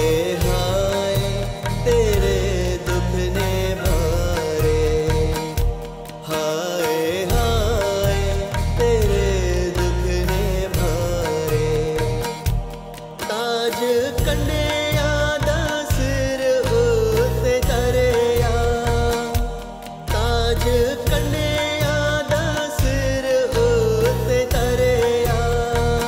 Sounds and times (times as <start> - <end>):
Christian music: 0.0 - 26.0
Music of Bollywood: 0.0 - 26.0
Tabla: 0.0 - 26.0.